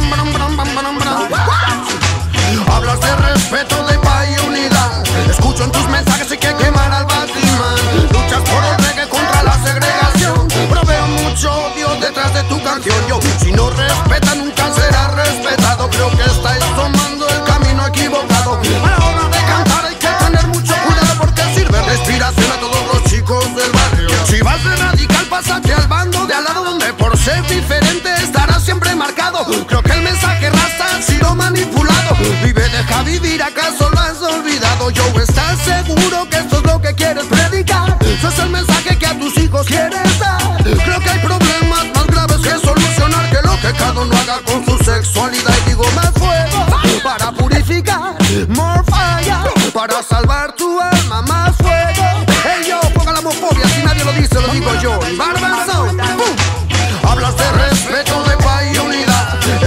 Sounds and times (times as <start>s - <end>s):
Music: 0.0s - 59.6s.